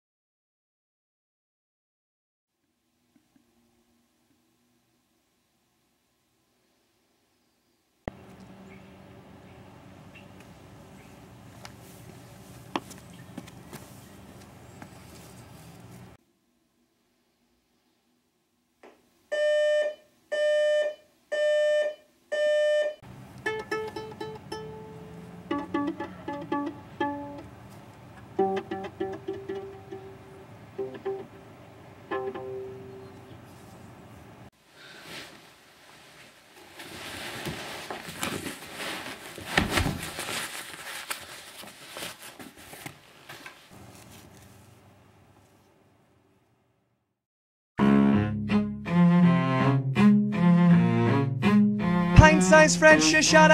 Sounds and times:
Music: 23.4s - 27.5s, 28.2s - 31.4s, 32.1s - 33.0s, 47.8s - 53.5s.

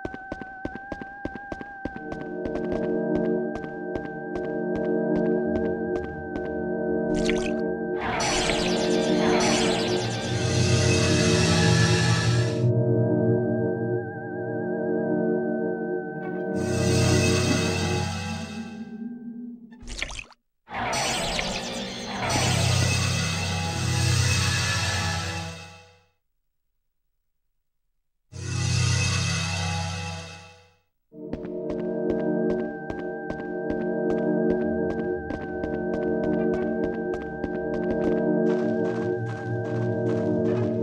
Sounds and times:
Music: 0.0s - 19.7s, 22.0s - 26.2s, 28.4s - 40.8s.

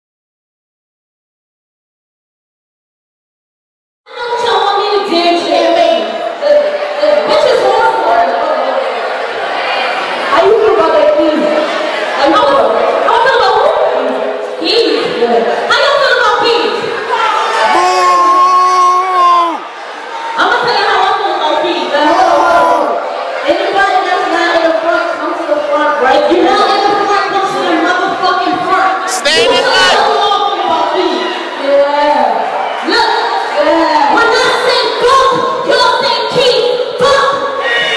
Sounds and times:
Inside, large room or hall: 4.1s - 37.9s
Speech: 20.4s - 37.4s.

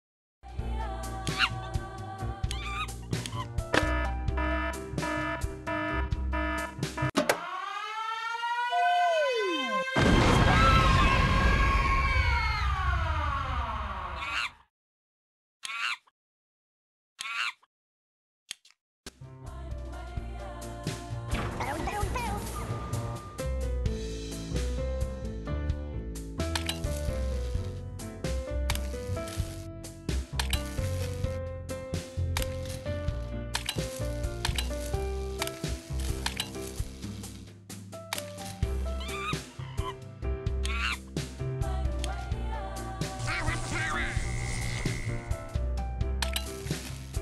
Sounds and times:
Music: 0.4s - 7.2s, 19.2s - 47.2s
Siren: 4.4s - 10.8s.

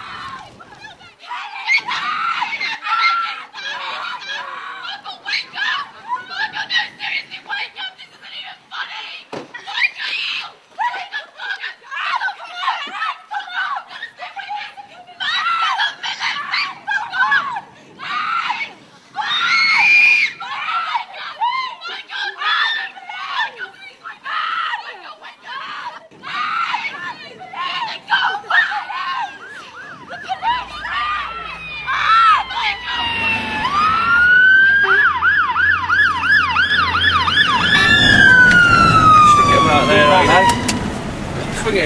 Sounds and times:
Screaming: 0.0s - 7.9s, 8.8s - 40.8s.

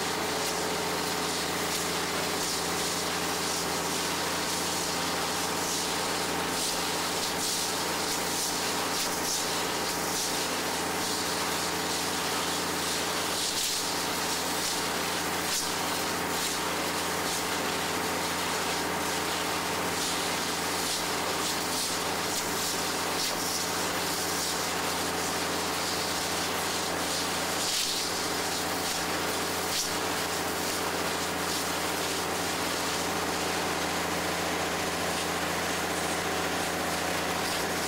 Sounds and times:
Steam: 0.0s - 37.8s.

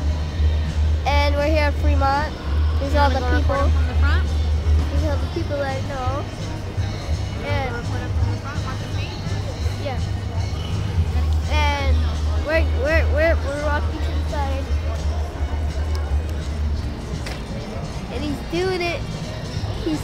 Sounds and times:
Music: 0.0s - 20.0s.

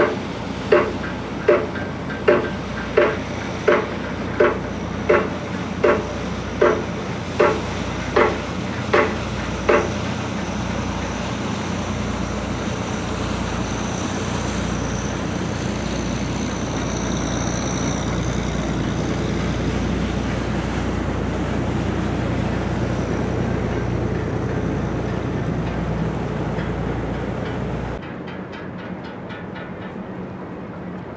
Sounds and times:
Ship: 0.0s - 31.1s
Wind: 0.0s - 31.1s.

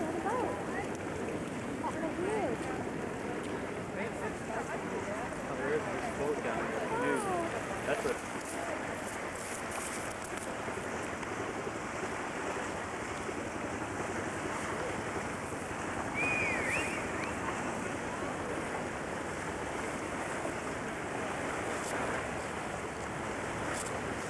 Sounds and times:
Boat, Water vehicle: 0.0s - 24.2s.

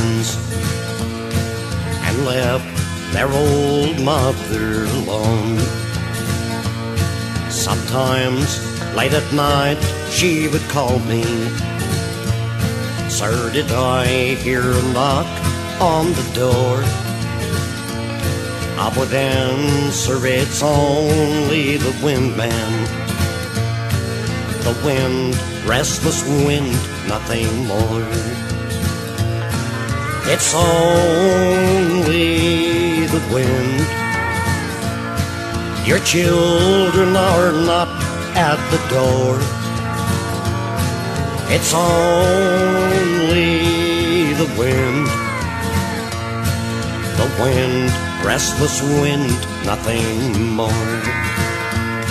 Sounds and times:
Music: 0.0s - 52.1s.

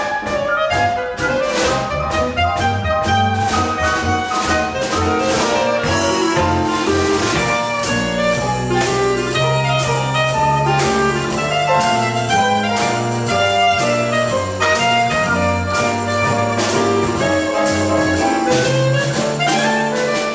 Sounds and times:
Orchestra: 0.0s - 20.3s
Piano: 0.0s - 20.3s.

